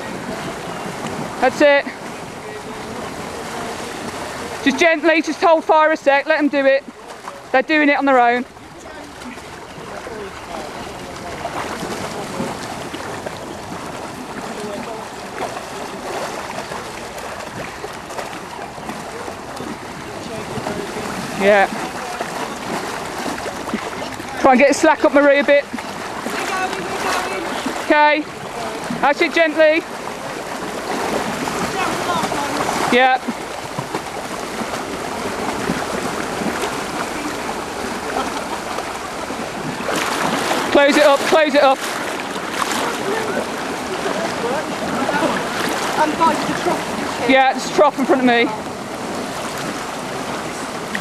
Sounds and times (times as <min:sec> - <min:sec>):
Stream: 0:00.0 - 0:51.0.